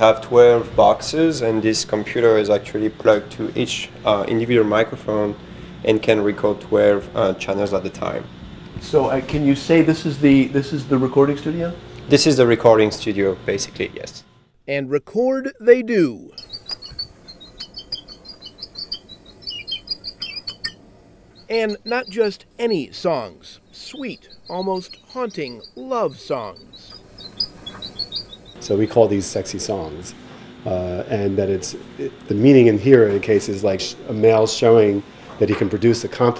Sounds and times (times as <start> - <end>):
Cricket: 16.3 - 20.8, 21.4 - 30.6.